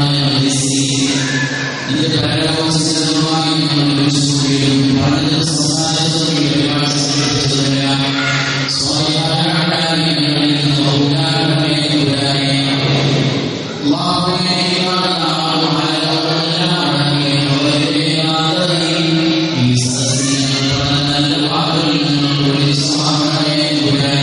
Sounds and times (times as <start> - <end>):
Male speech, man speaking: 0.0 - 24.2
Narration, monologue: 0.0 - 24.2
Speech synthesizer: 19.6 - 24.2.